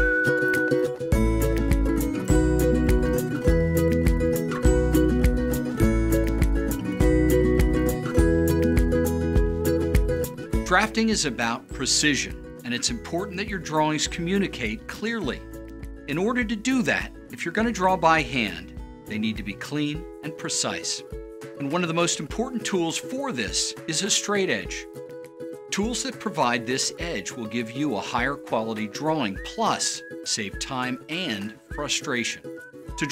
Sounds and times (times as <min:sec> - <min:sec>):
Music: 0:00.0 - 0:33.1
Speech: 0:10.7 - 0:15.4, 0:16.1 - 0:24.8, 0:25.7 - 0:33.1.